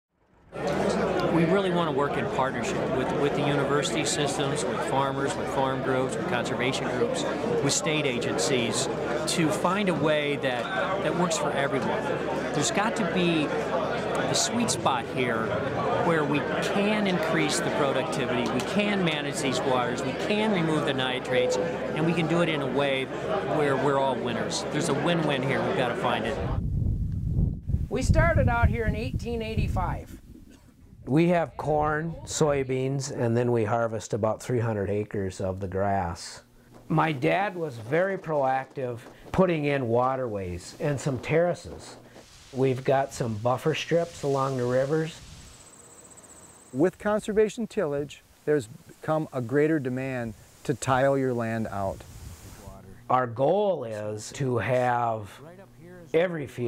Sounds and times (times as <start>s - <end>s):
Speech: 1.2s - 26.5s, 31.1s - 42.0s, 42.6s - 45.2s, 46.8s - 52.0s, 52.6s - 56.6s.